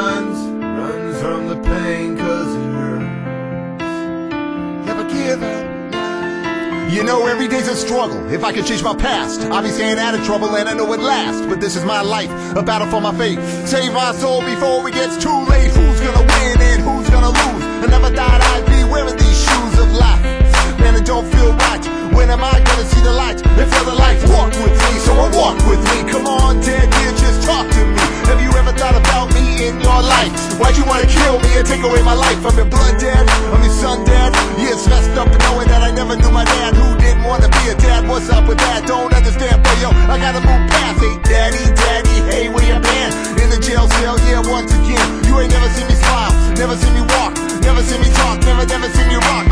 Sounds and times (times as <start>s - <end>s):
Exciting music: 15.4s - 49.5s.